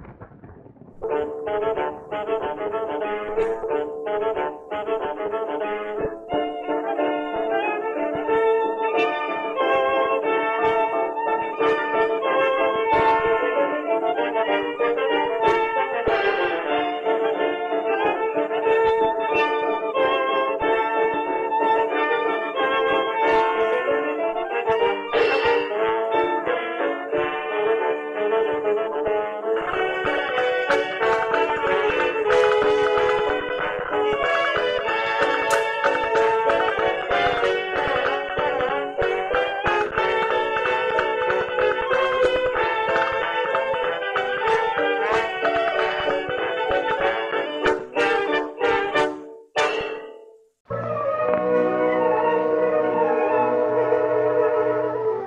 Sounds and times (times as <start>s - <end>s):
Music: 0.0s - 55.2s.